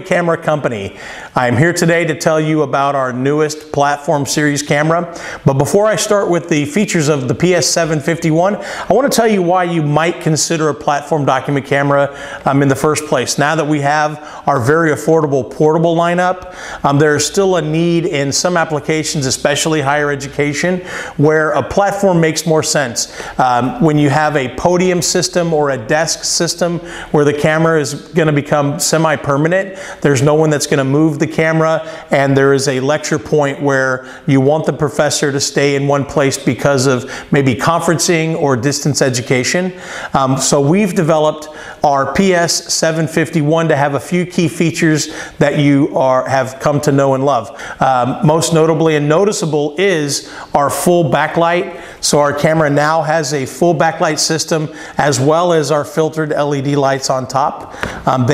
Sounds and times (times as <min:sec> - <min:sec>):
Speech: 0:00.0 - 0:58.3.